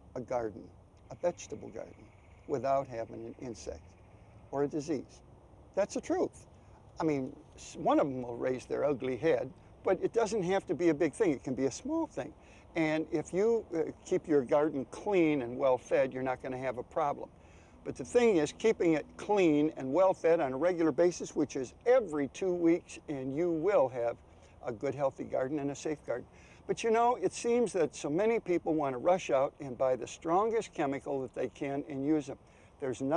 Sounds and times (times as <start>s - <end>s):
Speech: 0.0s - 3.8s, 4.5s - 5.2s, 5.8s - 6.4s, 7.0s - 33.1s.